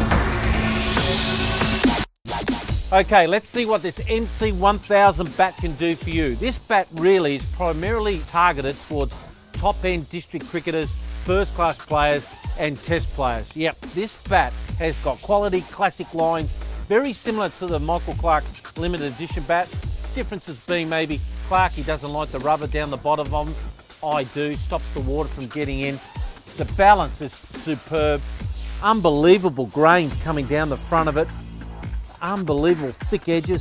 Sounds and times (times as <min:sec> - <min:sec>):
Music: 0:00.0 - 0:33.6
Speech: 0:02.9 - 0:26.0, 0:26.6 - 0:28.2, 0:28.8 - 0:31.3, 0:32.2 - 0:33.6.